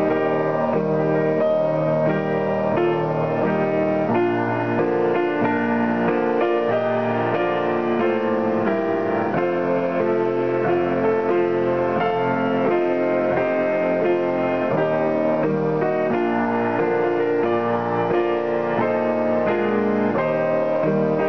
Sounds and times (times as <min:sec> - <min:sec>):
Music: 0:00.0 - 0:21.2.